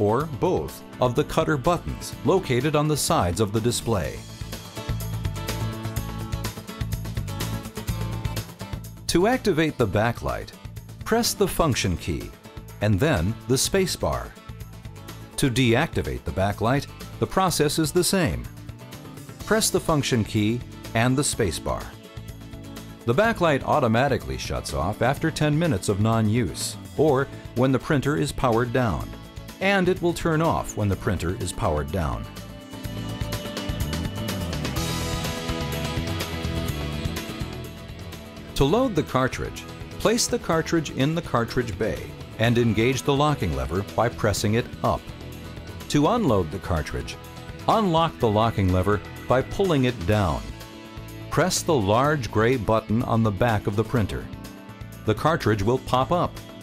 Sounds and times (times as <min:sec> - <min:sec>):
Speech: 0:00.0 - 0:04.2, 0:09.1 - 0:14.4, 0:15.4 - 0:18.5, 0:19.5 - 0:22.0, 0:23.1 - 0:32.3, 0:38.6 - 0:45.1, 0:45.9 - 0:50.5, 0:51.3 - 0:54.3, 0:55.1 - 0:56.4
Music: 0:00.0 - 0:56.6.